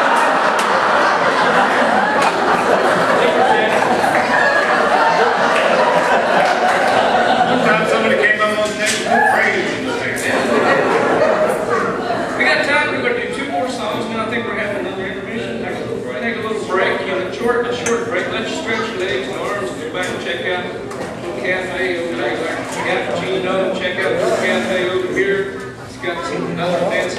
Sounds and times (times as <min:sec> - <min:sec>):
Speech: 0:07.5 - 0:27.1.